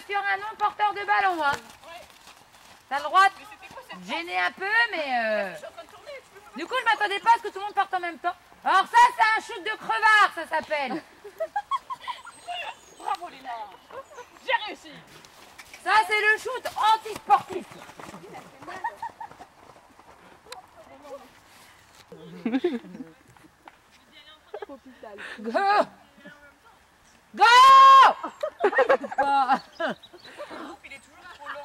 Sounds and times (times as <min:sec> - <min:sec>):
Clip-clop: 0:00.0 - 0:24.9.